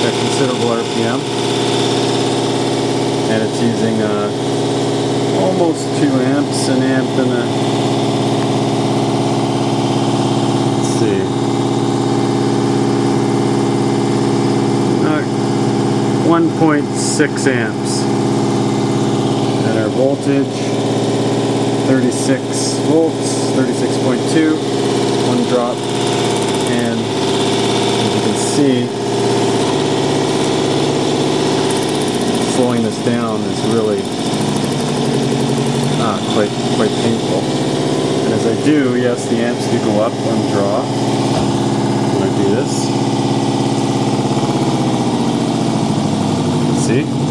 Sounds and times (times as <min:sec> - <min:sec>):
Speech: 0:00.0 - 0:01.3, 0:03.3 - 0:04.4, 0:05.3 - 0:07.6, 0:10.8 - 0:11.4, 0:15.0 - 0:15.3, 0:16.2 - 0:18.1, 0:19.6 - 0:20.8, 0:21.8 - 0:24.6, 0:25.3 - 0:25.8, 0:26.7 - 0:27.1, 0:28.0 - 0:29.0, 0:32.5 - 0:34.0, 0:36.0 - 0:37.5, 0:38.2 - 0:40.9, 0:42.1 - 0:43.0, 0:46.8 - 0:47.2
Engine: 0:00.0 - 0:47.3.